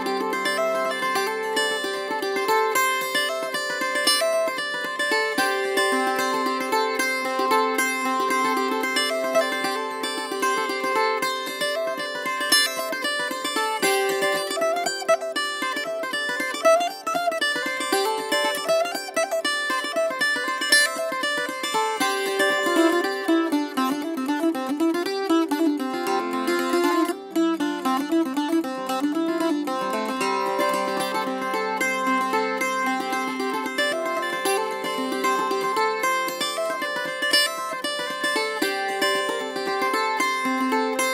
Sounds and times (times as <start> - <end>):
Strum: 0.0 - 41.1.